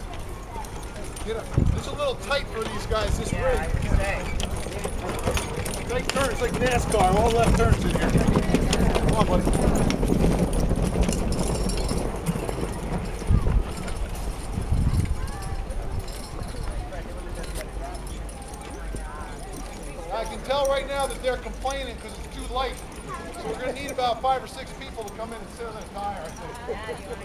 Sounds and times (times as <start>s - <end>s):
Clip-clop: 0.0s - 27.2s.